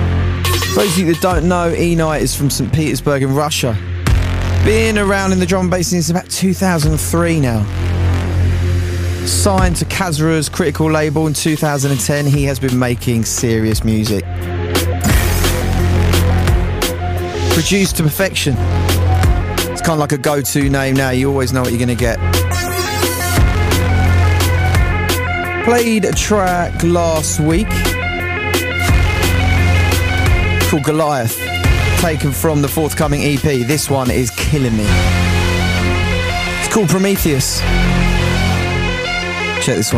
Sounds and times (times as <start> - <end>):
Music: 0.0 - 39.9
Speech: 0.7 - 3.8, 4.6 - 7.7, 9.3 - 14.3, 17.5 - 18.6, 19.8 - 22.2, 25.6 - 27.9, 30.7 - 35.0, 36.6 - 37.6, 39.6 - 39.9.